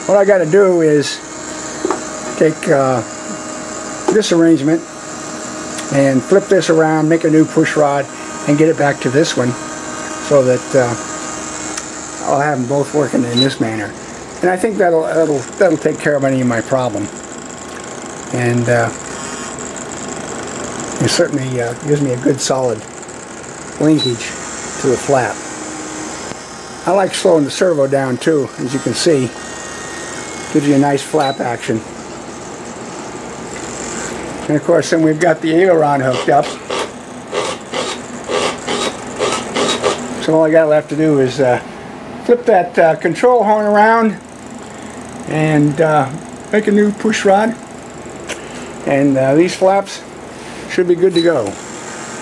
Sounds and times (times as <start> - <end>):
Speech: 0.1 - 1.2, 2.4 - 3.1, 4.1 - 4.9, 5.8 - 9.6, 10.2 - 11.0, 12.2 - 17.1, 18.3 - 19.0, 21.0 - 22.9, 23.8 - 25.4, 26.8 - 29.4, 30.5 - 31.9, 34.5 - 36.6, 40.2 - 41.6, 42.2 - 44.2, 45.2 - 47.6, 48.8 - 50.1, 50.7 - 51.6.